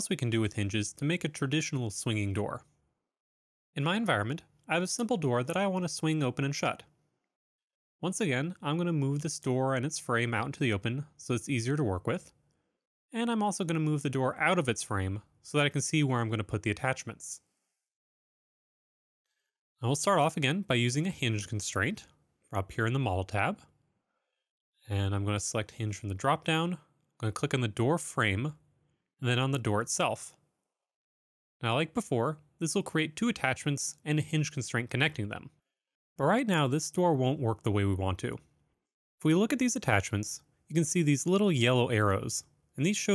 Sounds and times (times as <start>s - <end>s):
Speech: 0.0s - 2.8s, 3.8s - 7.0s, 8.0s - 12.4s, 13.1s - 17.5s, 19.8s - 23.7s, 24.8s - 28.6s, 29.2s - 30.4s, 31.6s - 35.6s, 36.2s - 38.5s, 39.2s - 43.1s.